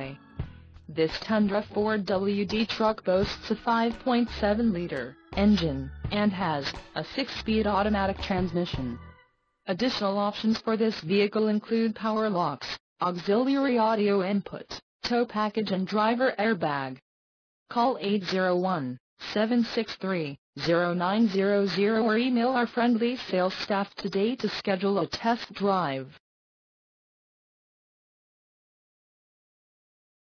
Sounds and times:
Speech: 0:00.0 - 0:00.2, 0:00.9 - 0:09.0, 0:09.7 - 0:17.0, 0:17.7 - 0:26.2.

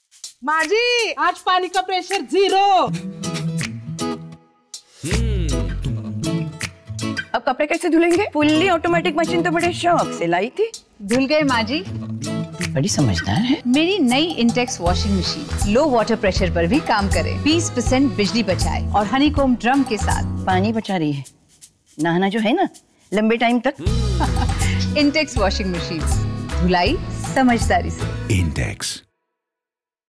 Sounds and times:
Music: 0:00.0 - 0:29.0
Speech: 0:00.5 - 0:02.9, 0:05.1 - 0:05.7, 0:07.4 - 0:11.8, 0:25.0 - 0:29.0.

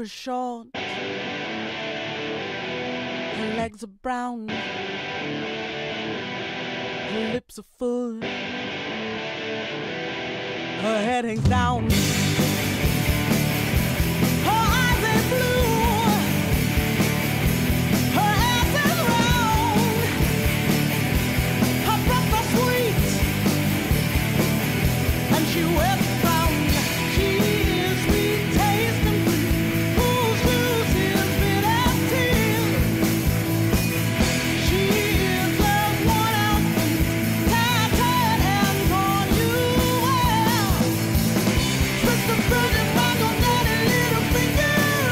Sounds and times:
Music: 0:00.8 - 0:03.8, 0:04.5 - 0:07.4, 0:08.2 - 0:45.1.

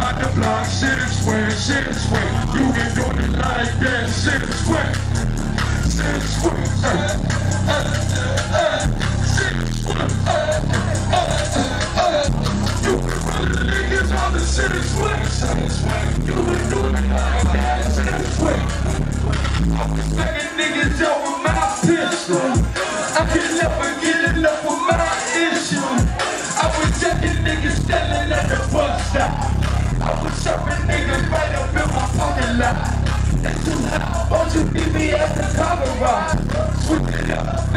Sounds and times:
Pop music: 0:00.0 - 0:37.7.

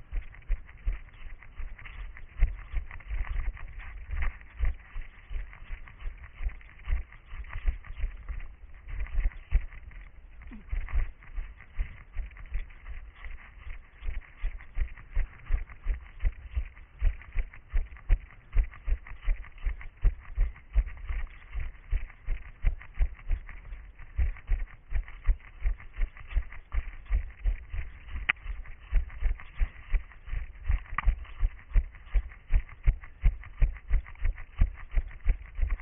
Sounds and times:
Run: 0:00.0 - 0:35.8.

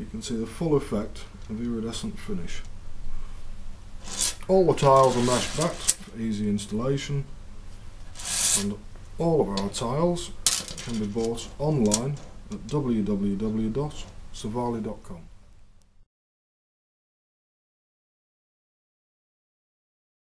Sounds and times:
Speech: 0:00.0 - 0:02.7, 0:04.4 - 0:07.3, 0:08.6 - 0:15.3.

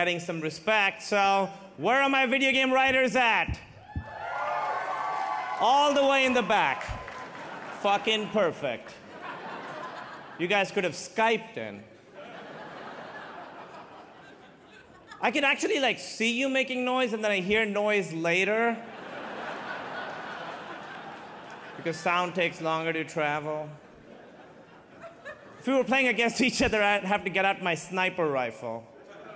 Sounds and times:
Speech: 0:00.0 - 0:03.6, 0:05.6 - 0:07.0, 0:07.8 - 0:09.0, 0:10.4 - 0:11.9, 0:15.2 - 0:18.9, 0:21.8 - 0:23.8, 0:25.6 - 0:28.9.

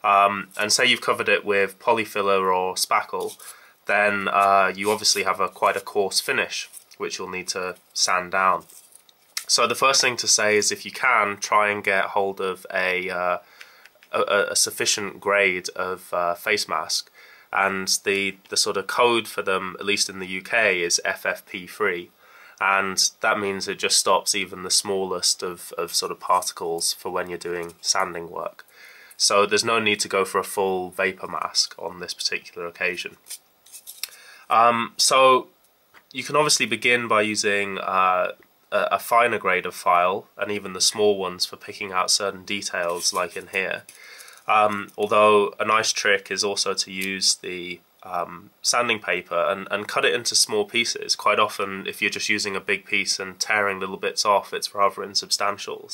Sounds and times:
Speech: 0:00.0 - 0:08.7, 0:09.4 - 0:13.4, 0:14.1 - 0:33.2, 0:34.5 - 0:35.5, 0:36.1 - 0:43.9, 0:44.5 - 0:55.9.

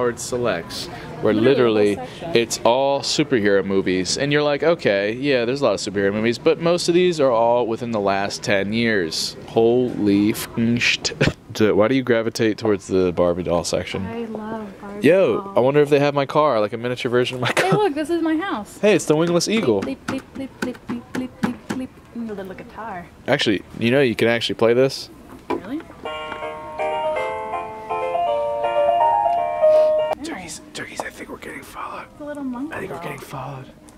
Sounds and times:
Inside, public space: 0:00.0 - 0:33.9
Music: 0:26.0 - 0:30.3.

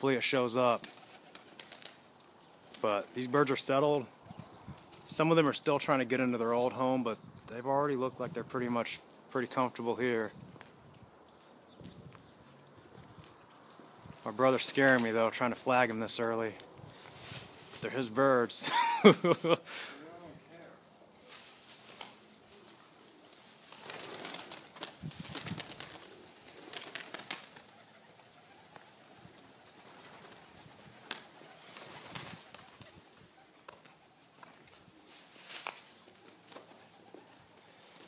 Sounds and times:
Speech: 0:00.0 - 0:00.8, 0:02.8 - 0:04.1, 0:05.2 - 0:10.3, 0:14.2 - 0:16.6, 0:17.8 - 0:18.7, 0:20.0 - 0:20.8
Outside, rural or natural: 0:00.0 - 0:38.0.

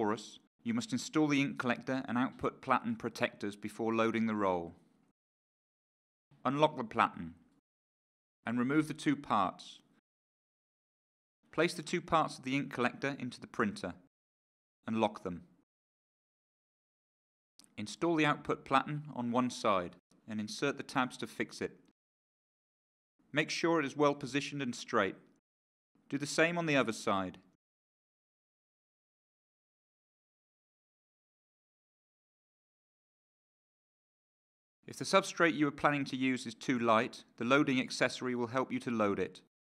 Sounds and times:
Speech: 0:00.0 - 0:04.8, 0:06.4 - 0:07.4, 0:08.5 - 0:09.9, 0:11.6 - 0:14.1, 0:14.9 - 0:15.5, 0:17.7 - 0:21.8, 0:23.4 - 0:25.3, 0:26.1 - 0:27.5, 0:34.9 - 0:39.5.

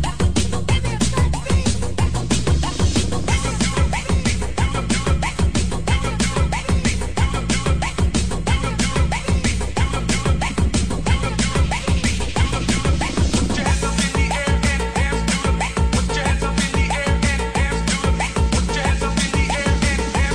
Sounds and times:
Disco: 0:00.0 - 0:20.3
Music of Asia: 0:00.0 - 0:20.3.

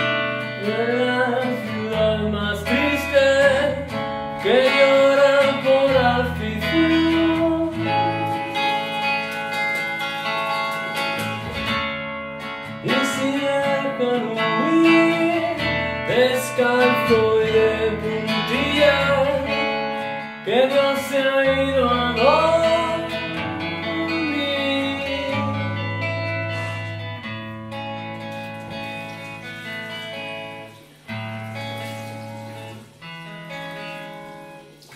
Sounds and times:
Bass guitar: 0:00.0 - 0:34.8.

